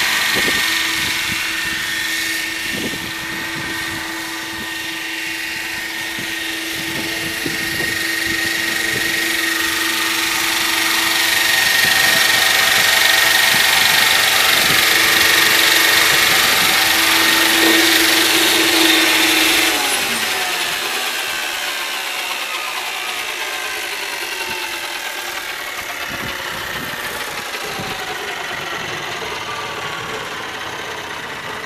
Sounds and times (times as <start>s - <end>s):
Helicopter: 0.0s - 31.6s.